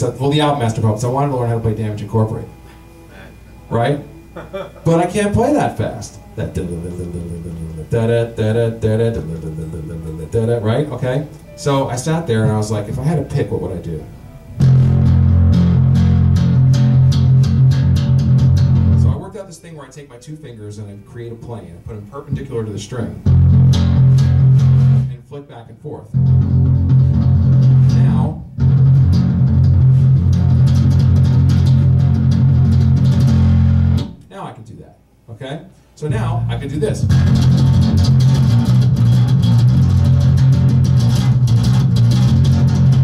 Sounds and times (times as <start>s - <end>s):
Speech: 0.0s - 2.5s, 4.9s - 14.1s, 19.0s - 23.2s, 25.1s - 26.2s, 27.8s - 28.4s, 34.3s - 37.2s
Bass guitar: 3.6s - 14.0s, 14.6s - 19.3s, 23.2s - 25.2s, 26.1s - 34.3s, 36.1s - 43.0s
Tapping (guitar technique): 14.6s - 19.3s, 23.2s - 25.1s, 26.1s - 34.3s, 37.0s - 43.0s.